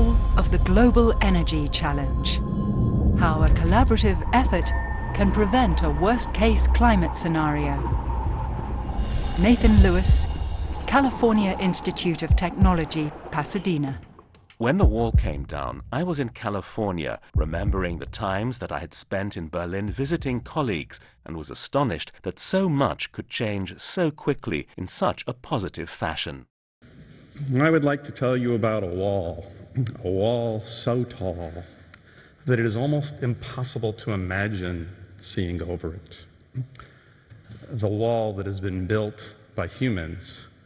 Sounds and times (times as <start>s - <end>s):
Speech: 0.0s - 2.4s, 3.2s - 7.9s, 9.4s - 10.3s, 10.9s - 26.5s, 27.4s - 31.7s, 32.5s - 36.7s, 37.7s - 40.5s.